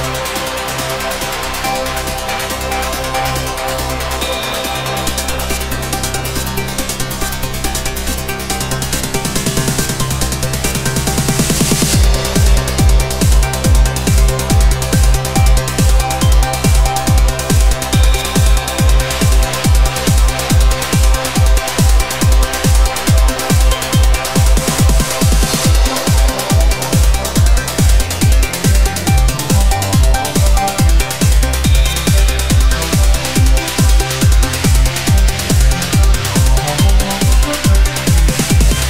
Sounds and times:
New-age music: 0:00.0 - 0:38.9
Trance music: 0:00.0 - 0:38.9.

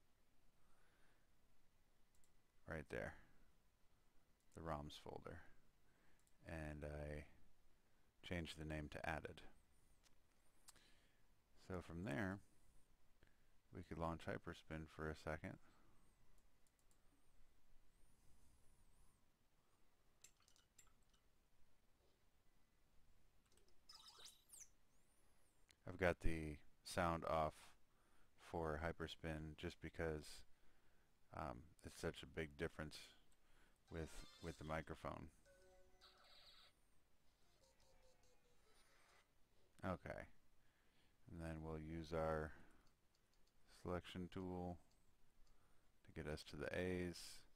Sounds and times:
Speech: 0:02.6 - 0:03.4, 0:04.6 - 0:05.6, 0:06.4 - 0:07.4, 0:08.2 - 0:09.6, 0:11.6 - 0:12.4, 0:13.7 - 0:15.7, 0:25.8 - 0:27.8, 0:28.4 - 0:30.5, 0:31.3 - 0:33.2, 0:33.9 - 0:35.3, 0:39.8 - 0:40.4, 0:41.3 - 0:42.7, 0:43.7 - 0:44.8, 0:46.1 - 0:47.5.

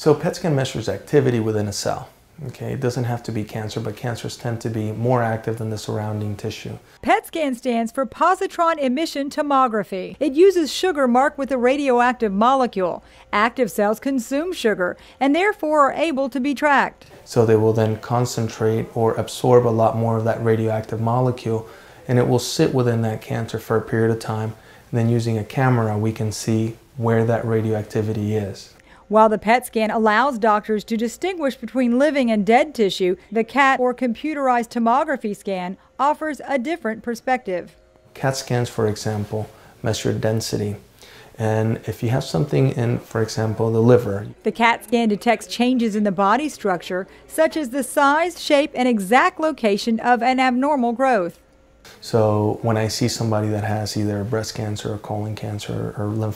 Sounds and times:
Speech: 0:00.0 - 0:40.8, 0:41.4 - 0:56.3.

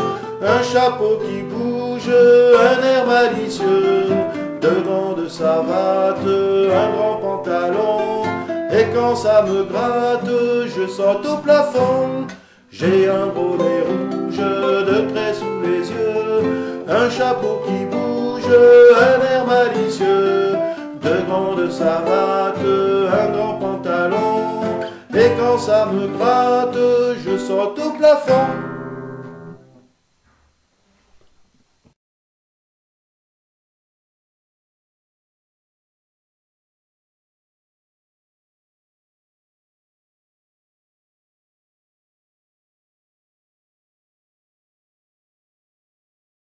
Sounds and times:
Music: 0:00.0 - 0:29.9.

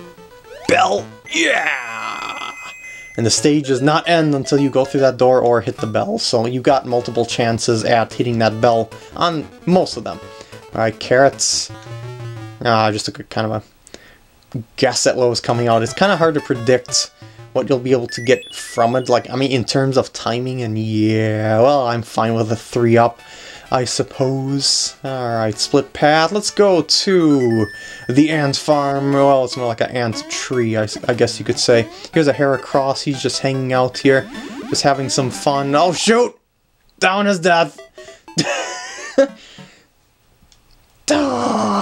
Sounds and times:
Music: 0:00.0 - 0:01.6, 0:02.6 - 0:12.9, 0:15.4 - 0:19.9, 0:22.8 - 0:36.1, 0:37.6 - 0:39.8
Speech: 0:00.7 - 0:02.3, 0:03.2 - 0:11.8, 0:12.6 - 0:13.7, 0:14.5 - 0:36.4, 0:37.0 - 0:37.8, 0:41.1 - 0:41.8.

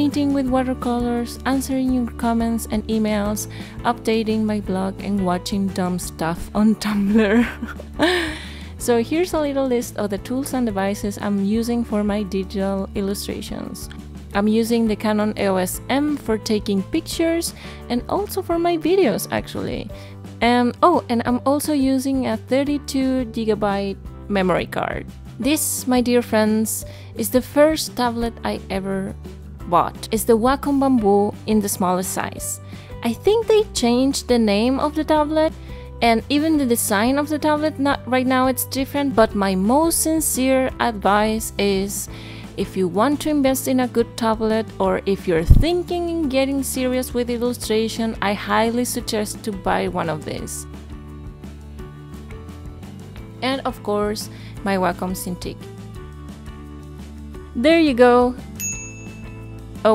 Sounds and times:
Speech: 0:00.0 - 0:07.3, 0:08.8 - 0:50.6, 0:53.4 - 0:55.6, 0:57.6 - 0:58.4
Music: 0:00.0 - 0:59.9.

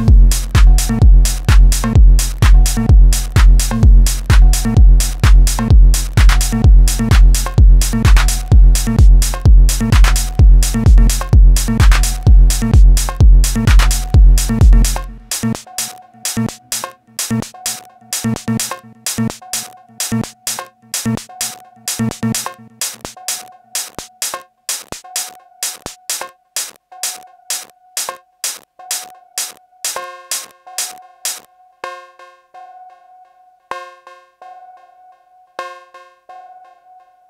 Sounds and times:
Drum machine: 0:00.0 - 0:31.5
Techno: 0:00.0 - 0:31.5
Synthesizer: 0:00.0 - 0:37.3.

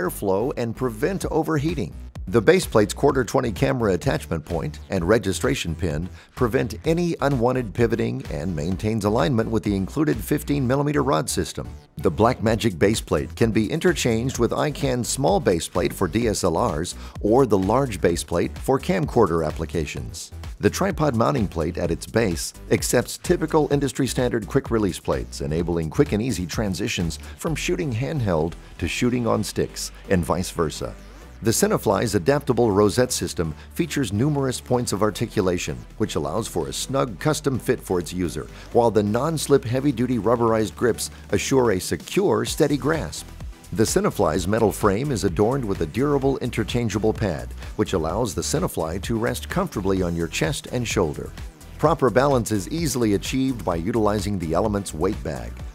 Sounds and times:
Speech: 0:00.0 - 0:55.6
Music: 0:00.0 - 0:55.7.

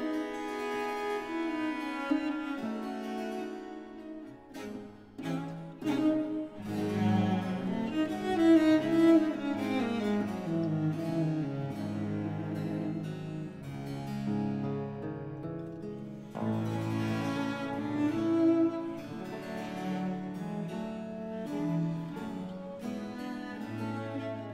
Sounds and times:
Piano: 0:00.0 - 0:24.5.

